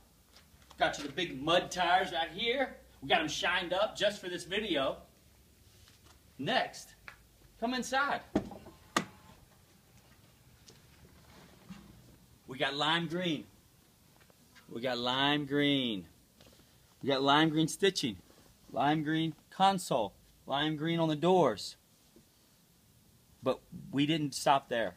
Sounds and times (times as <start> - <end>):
Speech: 0.8 - 5.1, 6.4 - 7.0, 7.6 - 8.3, 12.5 - 13.5, 14.7 - 16.1, 17.0 - 21.8, 23.4 - 24.9.